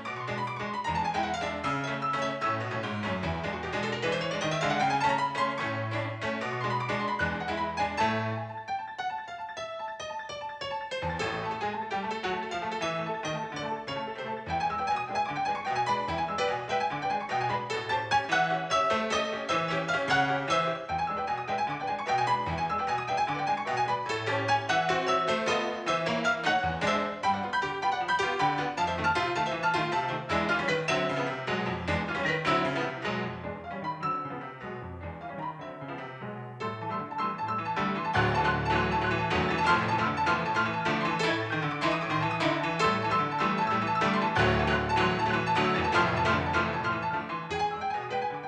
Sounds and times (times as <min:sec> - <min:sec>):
Music: 0:00.0 - 0:48.4.